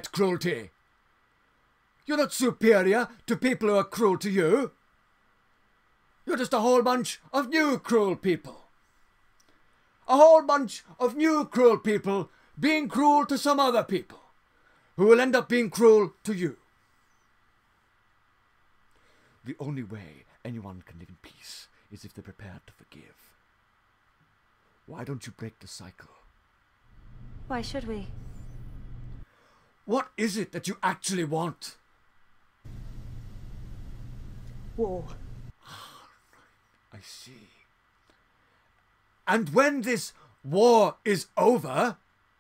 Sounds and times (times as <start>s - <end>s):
Male speech, man speaking: 0.0s - 0.7s, 2.1s - 4.8s, 6.3s - 8.7s, 10.1s - 14.3s, 15.0s - 16.6s, 19.5s - 23.3s, 24.9s - 26.2s, 29.9s - 31.8s, 36.9s - 37.6s, 39.3s - 42.0s
Female speech, woman speaking: 27.5s - 28.2s.